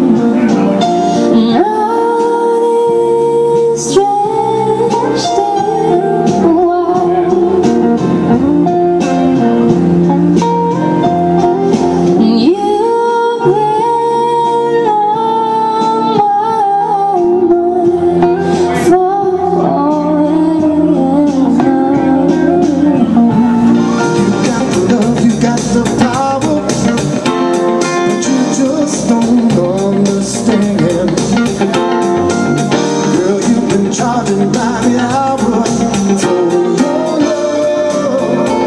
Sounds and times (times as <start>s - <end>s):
Music: 0.0s - 38.6s.